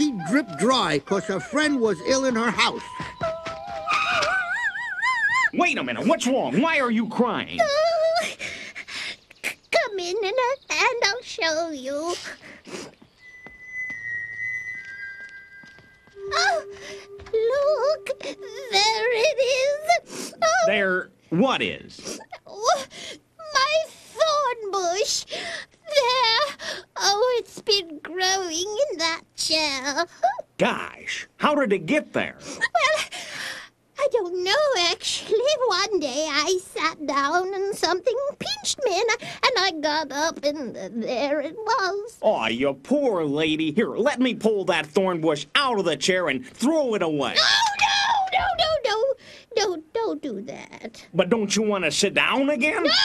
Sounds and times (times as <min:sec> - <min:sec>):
Music: 0:13.2 - 0:19.2.